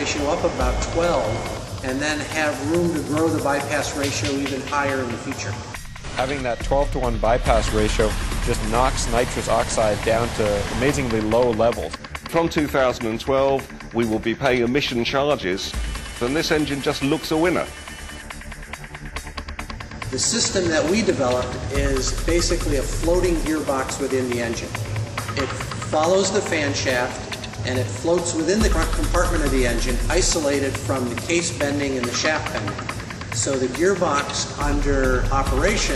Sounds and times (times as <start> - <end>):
Speech: 0.0 - 17.7, 20.2 - 24.7, 25.4 - 32.8, 33.4 - 35.9
Music: 0.0 - 35.9.